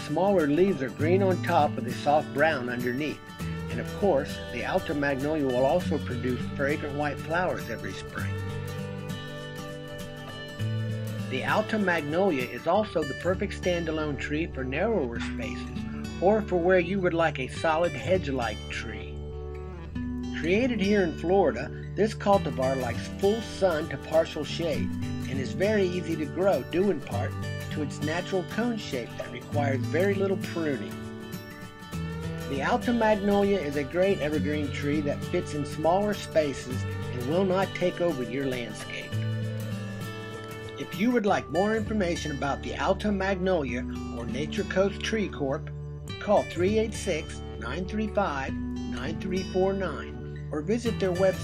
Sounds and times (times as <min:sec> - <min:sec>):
Speech: 0:00.0 - 0:08.3, 0:11.3 - 0:19.1, 0:20.4 - 0:31.0, 0:32.5 - 0:39.2, 0:40.8 - 0:51.4
Music: 0:00.0 - 0:51.4.